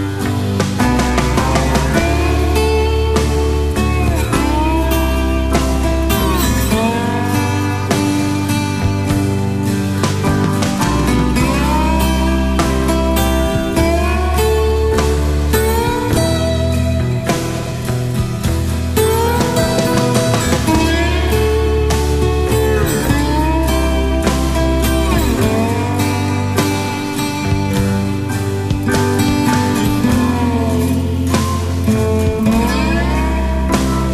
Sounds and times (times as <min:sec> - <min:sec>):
Music: 0:00.0 - 0:34.1.